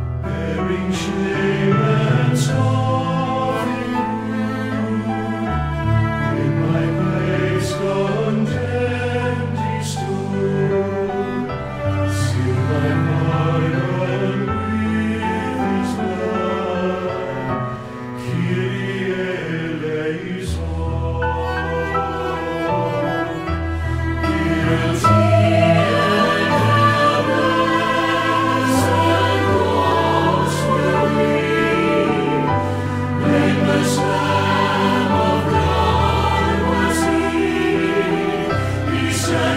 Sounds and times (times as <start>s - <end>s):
Sad music: 0.0s - 39.5s.